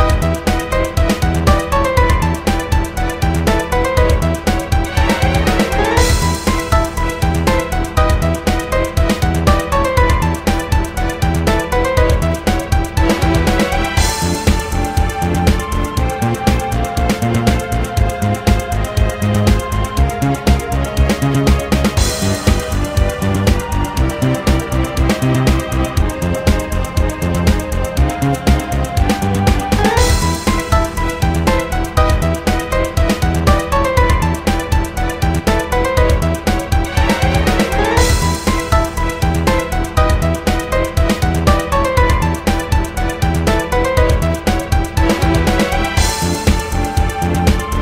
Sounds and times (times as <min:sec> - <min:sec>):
Video game music: 0:00.0 - 0:47.8.